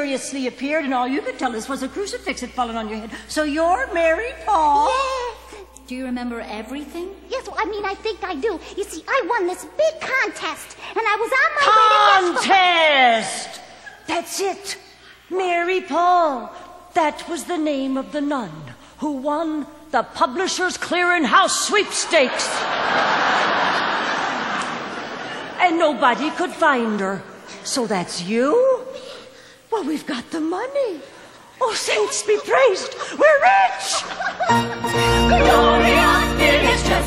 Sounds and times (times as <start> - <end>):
Speech: 0.0 - 22.6, 25.6 - 28.9, 29.7 - 34.1.